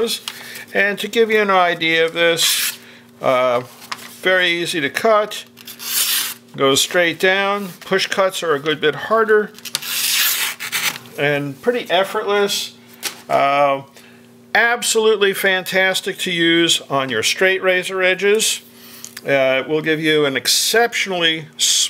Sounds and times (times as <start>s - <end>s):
Speech: 0.0s - 2.6s, 3.2s - 5.5s, 6.6s - 9.6s, 11.2s - 13.9s, 14.5s - 18.6s, 19.2s - 21.8s.